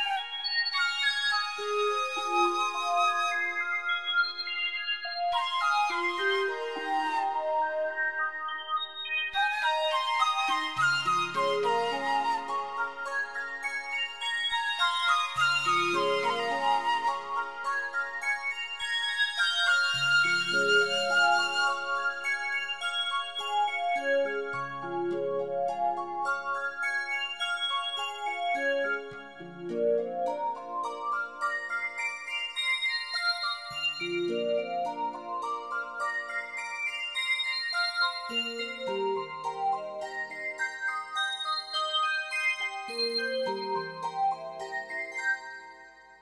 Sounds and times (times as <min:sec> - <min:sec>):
Music: 0:00.0 - 0:46.2.